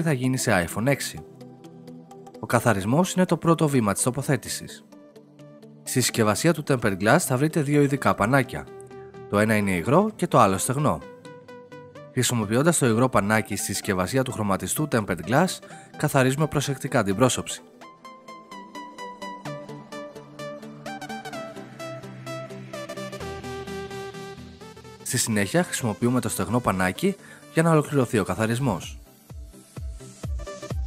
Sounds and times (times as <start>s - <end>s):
Speech: 0.0s - 1.2s, 2.4s - 4.8s, 5.9s - 8.7s, 9.3s - 11.0s, 12.2s - 17.6s, 25.0s - 29.0s
Music: 0.0s - 30.8s.